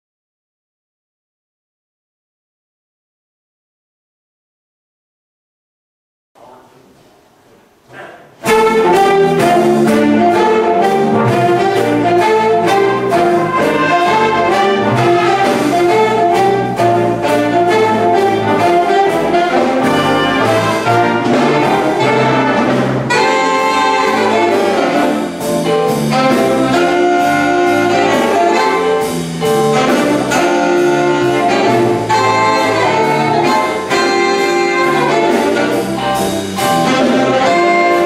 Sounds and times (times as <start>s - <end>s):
Jazz: 6.4s - 38.0s.